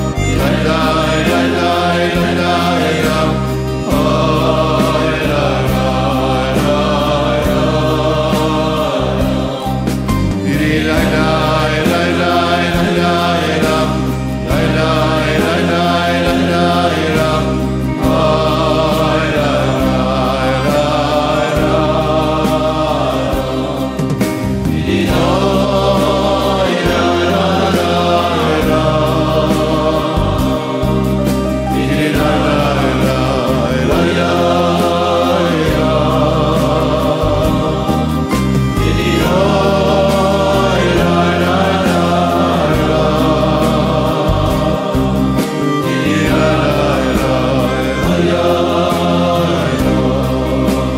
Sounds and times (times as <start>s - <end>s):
Choir: 0.0s - 50.9s.